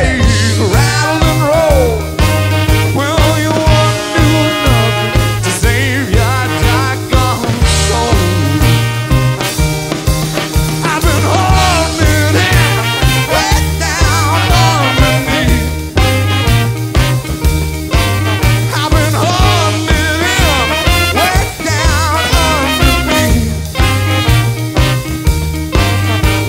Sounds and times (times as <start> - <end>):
Swing music: 0.0 - 26.4.